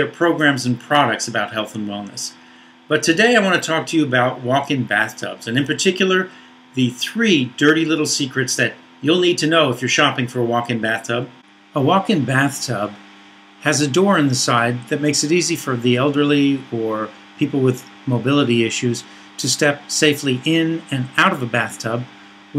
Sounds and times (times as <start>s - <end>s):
Speech: 0.0s - 13.0s, 13.6s - 22.5s.